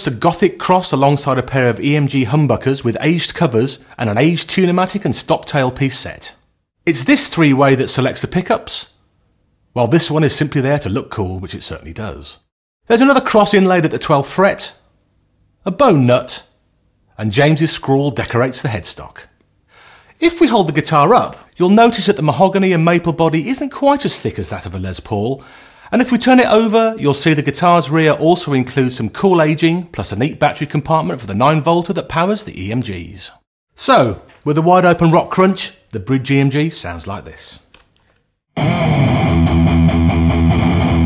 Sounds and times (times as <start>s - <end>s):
Speech: 0.0s - 9.0s, 9.8s - 14.8s, 15.6s - 16.6s, 17.2s - 19.4s, 20.2s - 37.7s.